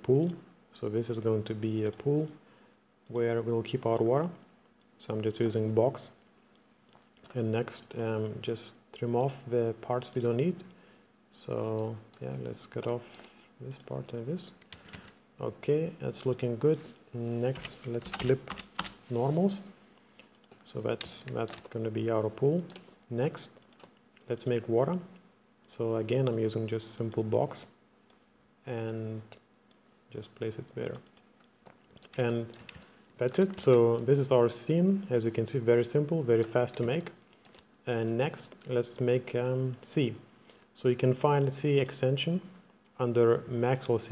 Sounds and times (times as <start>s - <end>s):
Speech: 0.0s - 2.4s, 3.1s - 4.4s, 5.0s - 6.2s, 7.3s - 10.7s, 11.3s - 14.6s, 15.4s - 18.5s, 19.1s - 19.7s, 20.6s - 23.6s, 24.3s - 27.8s, 28.6s - 29.4s, 30.1s - 31.1s, 32.1s - 32.6s, 33.2s - 37.2s, 37.8s - 44.1s.